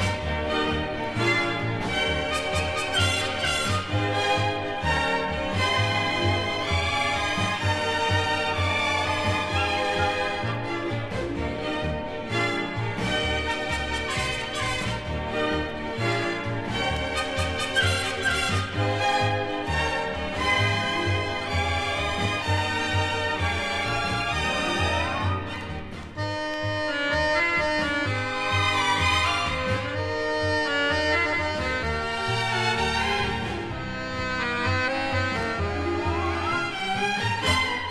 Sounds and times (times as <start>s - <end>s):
Music: 0.0s - 37.9s.